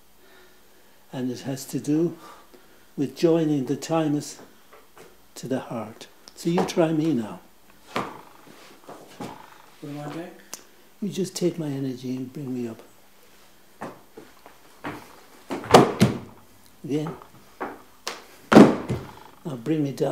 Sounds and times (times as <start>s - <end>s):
Inside, small room: 0.0s - 20.1s
Speech: 1.1s - 2.2s, 3.0s - 4.5s, 5.4s - 7.5s, 9.8s - 12.9s, 16.8s - 17.2s, 19.4s - 20.1s.